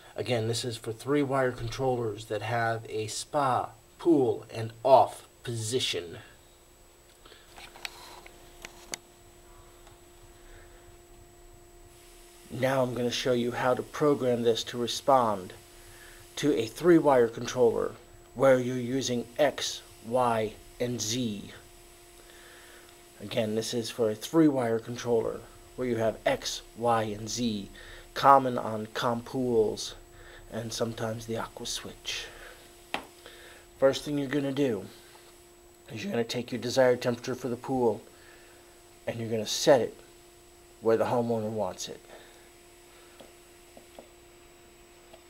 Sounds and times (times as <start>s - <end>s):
Speech: 0.2s - 6.4s, 12.5s - 15.6s, 16.4s - 21.6s, 23.2s - 32.4s, 33.8s - 35.0s, 35.9s - 38.1s, 39.1s - 40.0s, 40.8s - 42.2s.